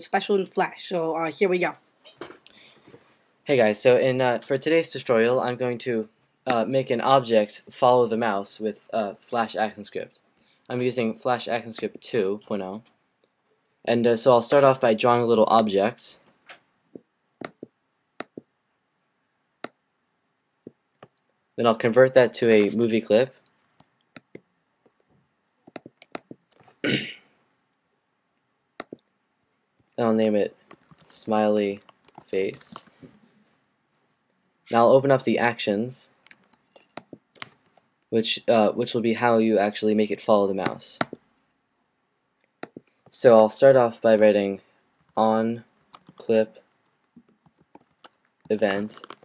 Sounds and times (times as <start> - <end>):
Speech: 0.0 - 2.4, 3.5 - 12.8, 13.9 - 16.2, 21.6 - 23.3, 30.0 - 32.9, 34.7 - 36.1, 38.2 - 41.1, 43.1 - 44.6, 45.2 - 45.6, 46.2 - 46.6, 48.5 - 49.2.